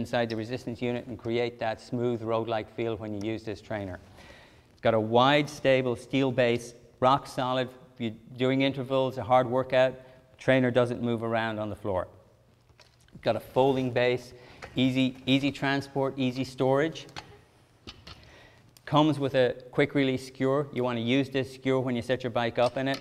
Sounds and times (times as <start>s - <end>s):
Speech: 0.0s - 4.0s, 4.8s - 12.1s, 13.2s - 17.1s, 18.8s - 23.0s.